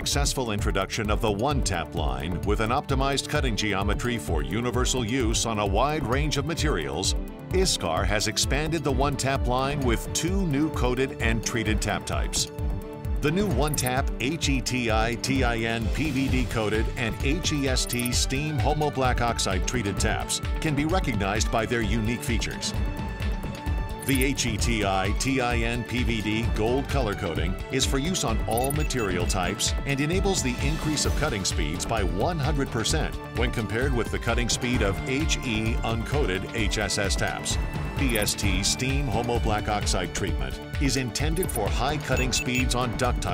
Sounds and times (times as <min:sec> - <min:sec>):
Speech: 0:00.0 - 0:12.5, 0:13.2 - 0:22.8, 0:24.0 - 0:43.3
Music: 0:00.0 - 0:43.3.